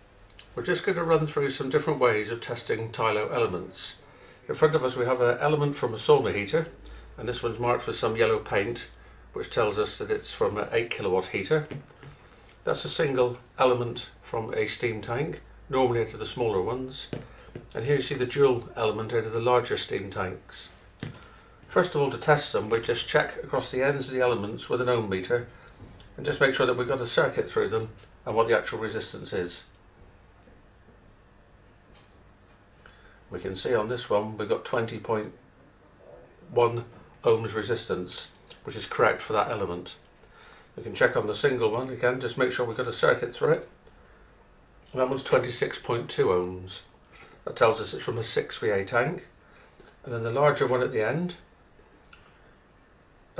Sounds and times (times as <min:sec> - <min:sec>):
Speech: 0:00.6 - 0:11.8, 0:12.6 - 0:20.8, 0:21.7 - 0:25.5, 0:26.2 - 0:29.8, 0:33.3 - 0:35.4, 0:36.0 - 0:40.1, 0:40.8 - 0:43.8, 0:44.9 - 0:49.4, 0:50.0 - 0:51.5.